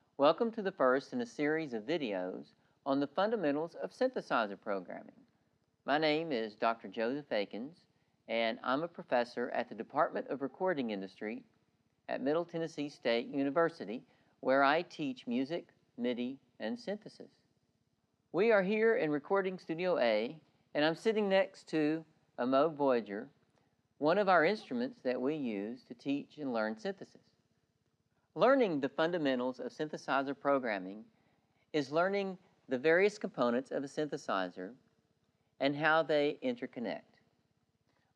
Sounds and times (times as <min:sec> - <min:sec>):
Speech: 0:00.2 - 0:05.2, 0:05.9 - 0:11.5, 0:12.1 - 0:17.4, 0:18.4 - 0:23.3, 0:24.0 - 0:27.3, 0:28.4 - 0:31.1, 0:31.8 - 0:34.8, 0:35.6 - 0:37.2.